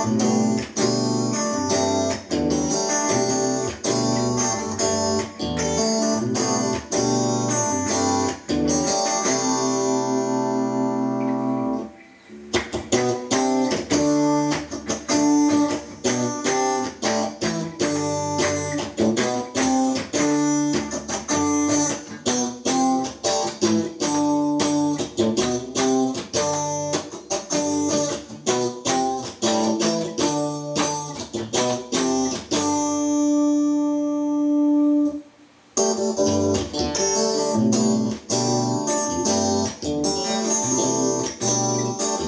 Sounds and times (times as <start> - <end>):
Acoustic guitar: 0.0 - 42.2
Strum: 0.0 - 42.2.